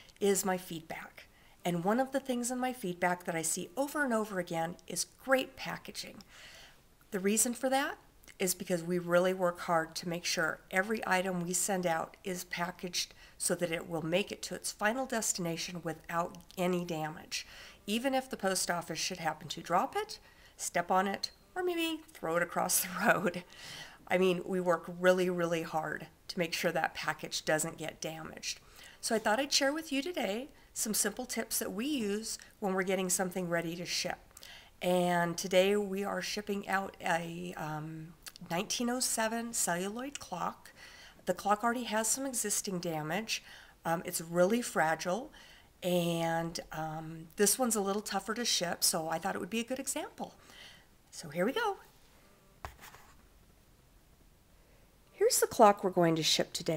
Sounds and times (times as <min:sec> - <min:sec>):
Speech: 0:00.2 - 0:06.2, 0:07.1 - 0:23.4, 0:24.1 - 0:34.2, 0:34.8 - 0:40.7, 0:41.3 - 0:50.4, 0:51.1 - 0:51.9, 0:55.2 - 0:56.7.